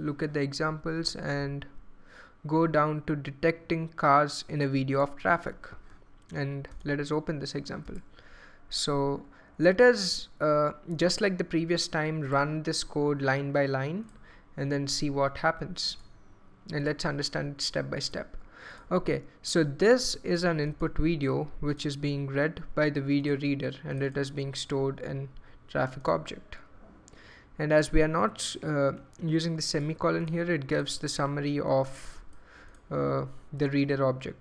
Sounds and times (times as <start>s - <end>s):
Speech: 0.0s - 1.8s, 2.5s - 8.0s, 8.7s - 16.0s, 16.7s - 26.7s, 27.6s - 32.2s, 32.9s - 34.4s.